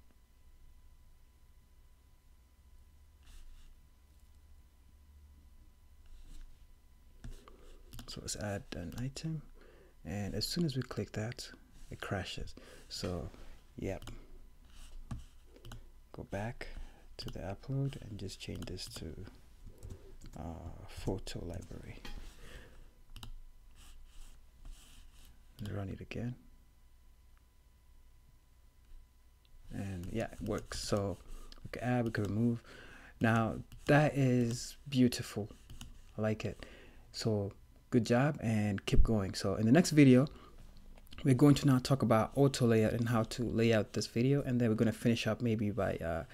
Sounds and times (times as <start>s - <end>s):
Speech: 8.1s - 14.2s, 16.1s - 19.4s, 20.4s - 22.2s, 25.6s - 26.4s, 29.7s - 32.6s, 33.2s - 35.6s, 36.2s - 40.4s, 41.2s - 46.3s.